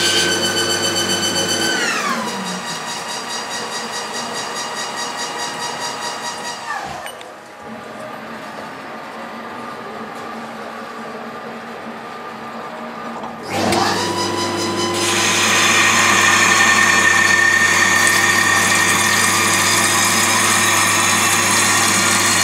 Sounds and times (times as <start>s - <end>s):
Power tool: 0.0s - 7.2s, 13.4s - 22.4s.